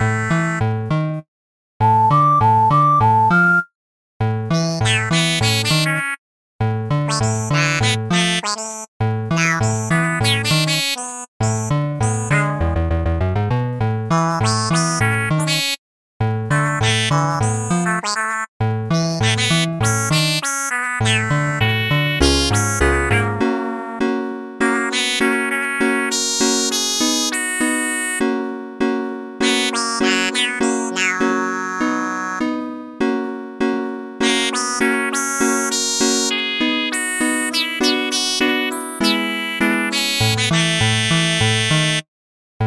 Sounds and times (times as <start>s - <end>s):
Music: 0.0s - 42.1s.